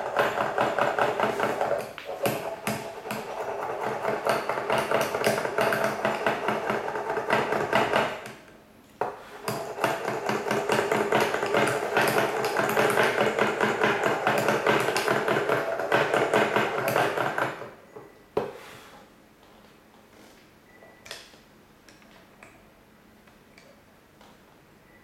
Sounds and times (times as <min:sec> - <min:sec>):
Tools: 0:00.0 - 0:08.4, 0:09.0 - 0:18.2.